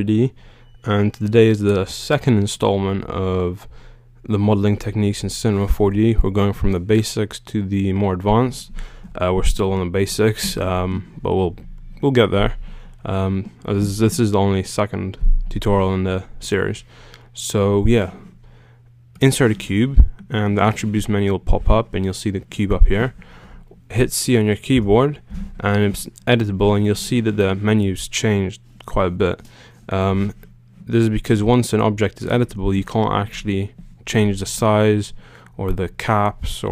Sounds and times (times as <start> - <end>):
Speech: 0.0 - 18.3, 19.2 - 23.2, 23.9 - 36.7.